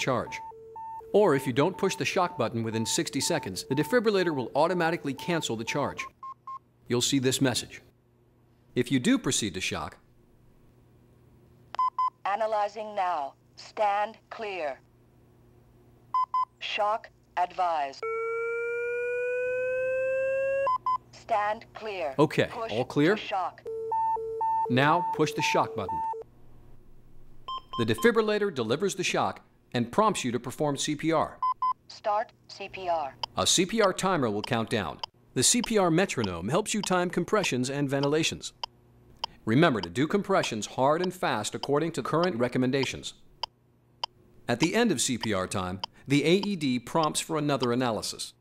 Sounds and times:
Speech: 1.2 - 6.1, 6.9 - 7.9, 8.8 - 10.0, 24.7 - 26.0, 27.8 - 38.6, 39.5 - 43.2, 44.5 - 48.4.

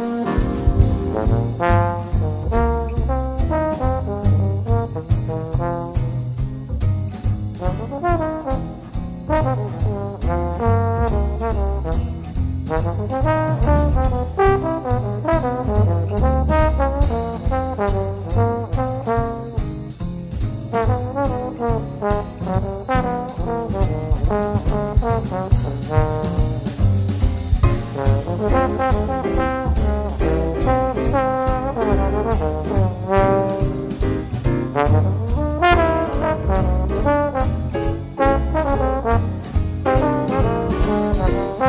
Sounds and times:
Music: 0.0 - 41.6.

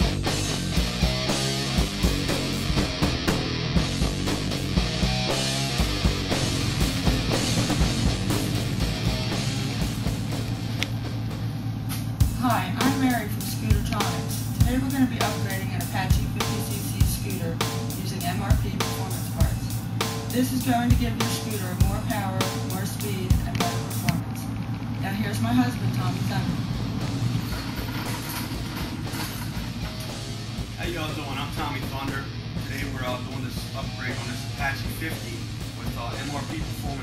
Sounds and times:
Music: 0.0 - 37.0
Speech: 12.4 - 19.7, 20.4 - 26.6, 30.8 - 37.0.

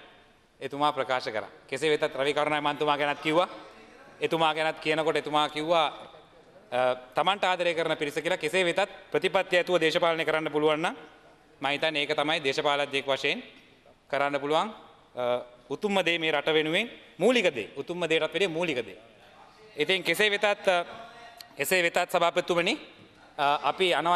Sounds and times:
Male speech, man speaking: 0.6 - 11.0, 11.6 - 13.5, 14.1 - 24.1.

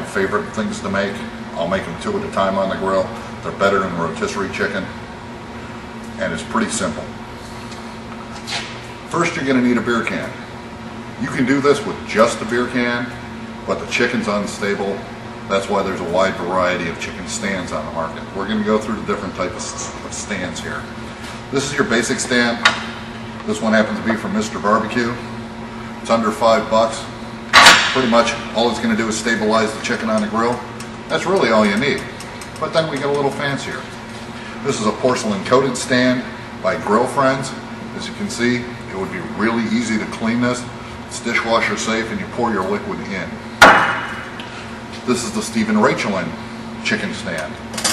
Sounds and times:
Speech: 0.0 - 5.0, 6.2 - 7.2, 9.1 - 10.4, 11.2 - 20.9, 21.5 - 22.7, 23.4 - 25.3, 26.0 - 27.2, 27.9 - 33.9, 34.6 - 43.4, 45.0 - 47.9.

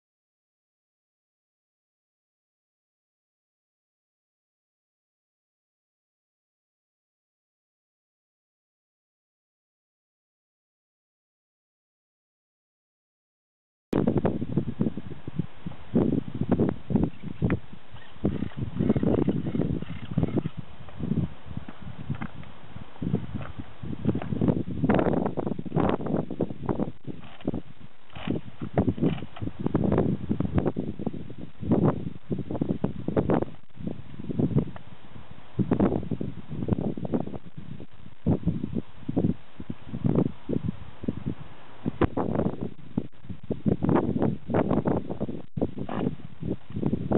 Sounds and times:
Outside, rural or natural: 14.0 - 47.1.

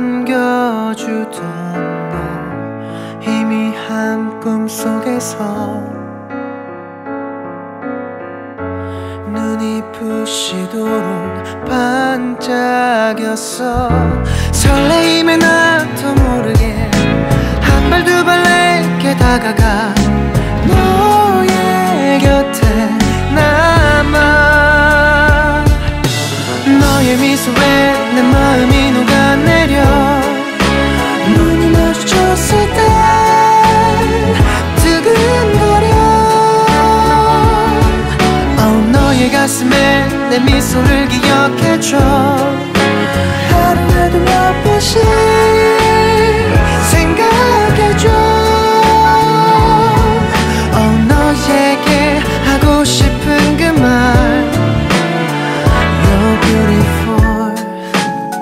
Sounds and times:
Music: 0.0 - 58.4.

